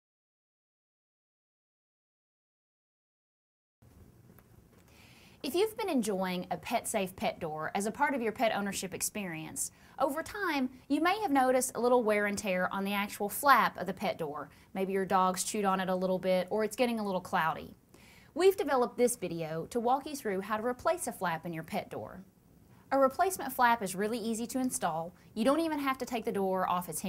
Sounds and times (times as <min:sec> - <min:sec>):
Speech: 0:05.5 - 0:17.8, 0:18.4 - 0:22.3, 0:22.9 - 0:27.0.